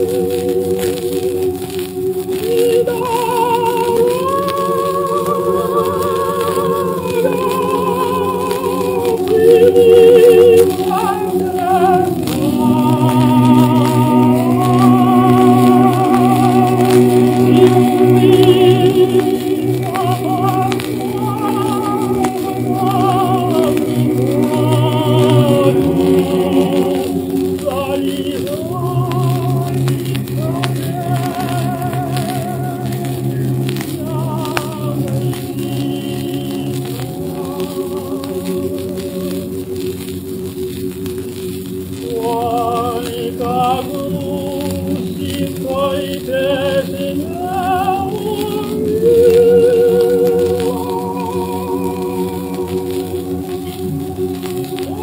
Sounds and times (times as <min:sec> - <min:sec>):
Choir: 0:00.0 - 0:55.0.